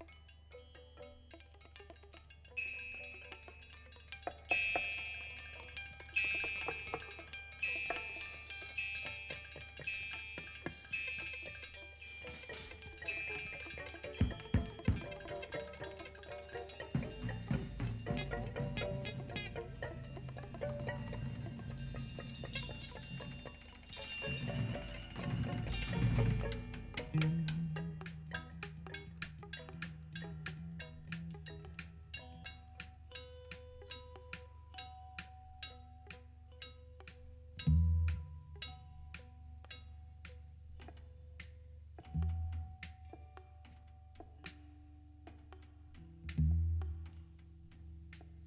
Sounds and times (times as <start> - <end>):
Percussion: 0.0 - 48.4.